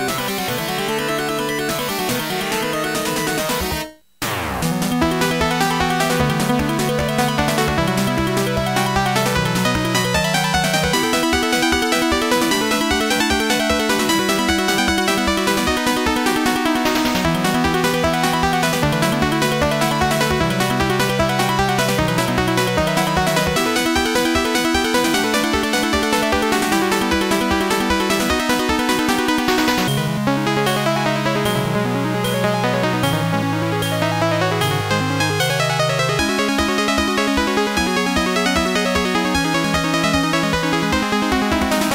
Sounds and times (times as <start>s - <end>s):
Soundtrack music: 0.1s - 41.9s
Theme music: 2.4s - 34.6s.